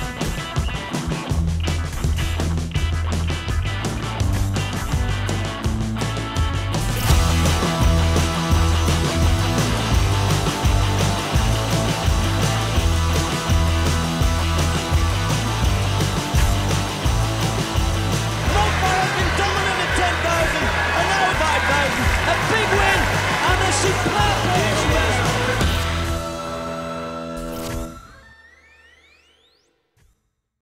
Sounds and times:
Music: 0.0 - 30.6
Speech: 18.4 - 25.7.

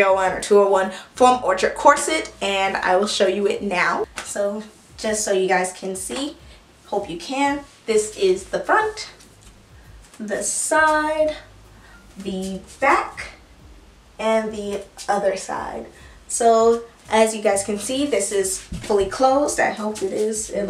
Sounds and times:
Speech: 0.0 - 9.2, 10.2 - 11.5, 12.2 - 13.4, 14.2 - 20.7
Inside, small room: 0.0 - 20.7.

